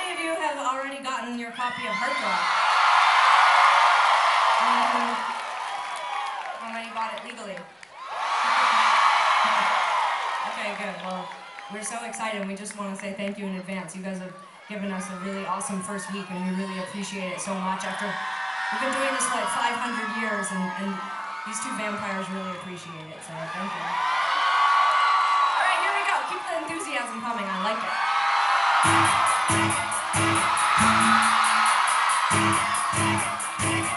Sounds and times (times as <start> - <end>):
Speech: 10.5 - 18.2, 18.8 - 23.9.